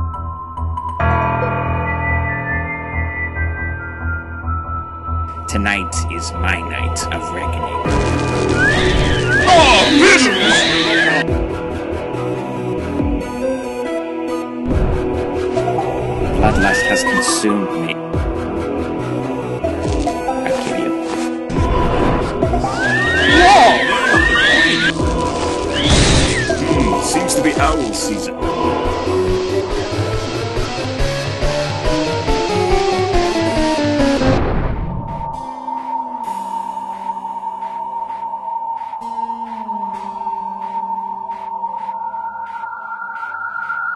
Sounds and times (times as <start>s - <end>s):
Music: 0.0s - 43.9s
Speech: 5.5s - 7.8s, 9.5s - 10.8s, 16.4s - 18.0s, 26.6s - 28.4s.